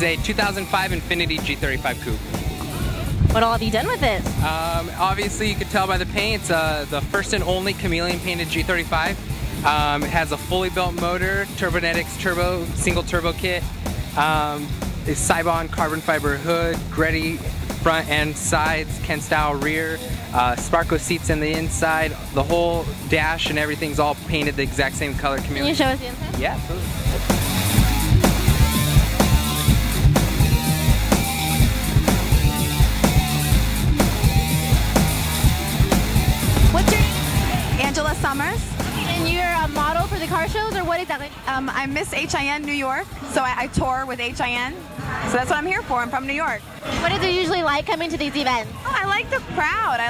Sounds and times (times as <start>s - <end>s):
Speech: 0.0s - 2.2s, 3.3s - 13.6s, 14.2s - 26.9s
Music: 0.0s - 50.1s.